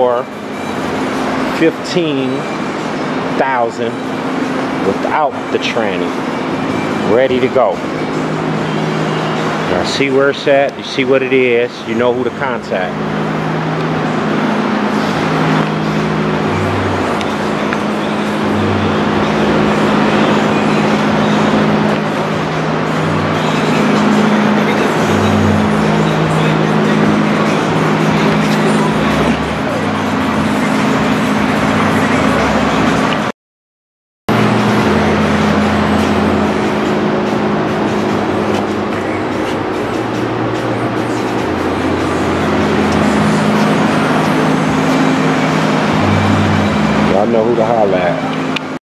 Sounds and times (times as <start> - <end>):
Speech: 0.0 - 0.3, 1.5 - 2.5, 3.4 - 4.0, 4.8 - 6.1, 7.0 - 7.8, 9.7 - 13.0, 47.1 - 48.4
Vehicle: 0.0 - 33.3, 34.3 - 48.8.